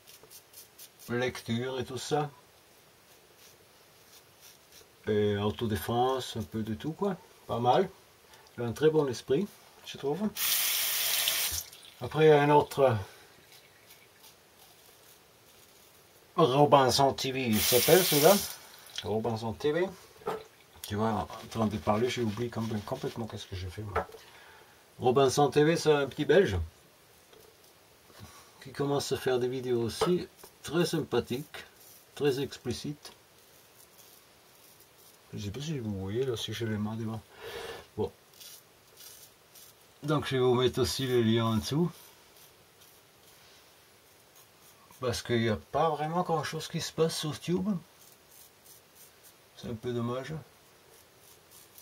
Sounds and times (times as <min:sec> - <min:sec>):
Speech: 0:01.1 - 0:02.4, 0:05.0 - 0:08.0, 0:08.6 - 0:10.4, 0:12.0 - 0:13.1, 0:16.4 - 0:20.0, 0:20.8 - 0:24.1, 0:25.0 - 0:26.7, 0:28.6 - 0:33.2, 0:35.3 - 0:37.3, 0:38.0 - 0:38.2, 0:40.0 - 0:42.0, 0:45.0 - 0:47.9, 0:49.6 - 0:50.5.